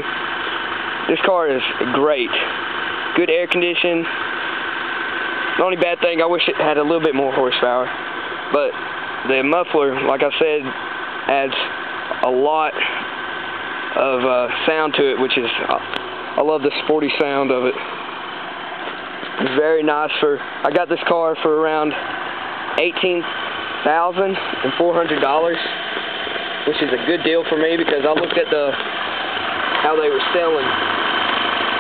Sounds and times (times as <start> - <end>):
Idling: 0.0 - 31.8
Speech: 1.1 - 2.6, 3.2 - 4.2, 5.6 - 7.9, 8.5 - 13.0, 14.0 - 17.9, 19.4 - 22.0, 22.8 - 25.8, 26.7 - 28.8, 29.8 - 30.8.